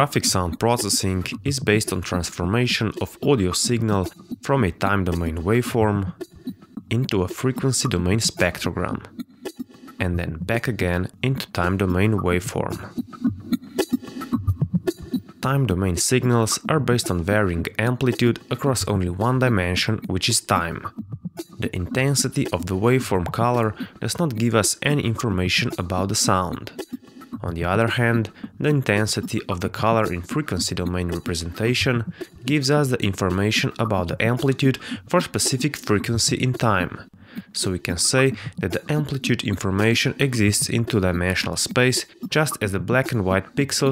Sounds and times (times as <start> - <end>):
Speech: 0.0 - 6.2, 6.9 - 9.1, 10.0 - 12.9, 15.4 - 21.0, 21.6 - 26.8, 27.4 - 43.9
Music: 0.0 - 43.9.